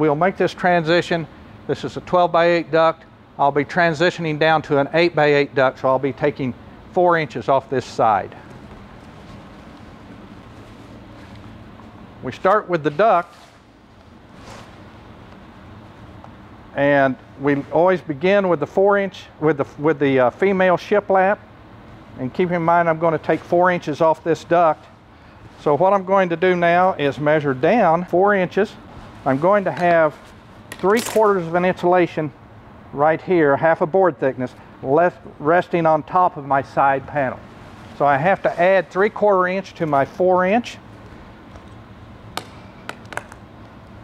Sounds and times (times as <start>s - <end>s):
Speech: 0.0s - 8.4s, 12.2s - 13.3s, 16.8s - 21.4s, 22.2s - 24.9s, 25.6s - 30.2s, 30.8s - 37.4s, 38.0s - 40.8s.